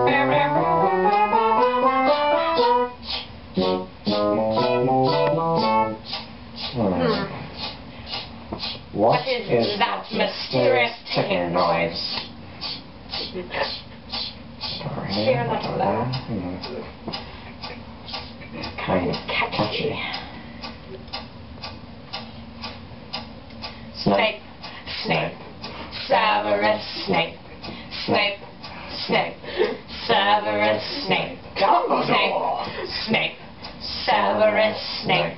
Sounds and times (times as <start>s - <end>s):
Speech: 6.8s - 7.4s, 14.7s - 16.9s, 30.1s - 35.3s.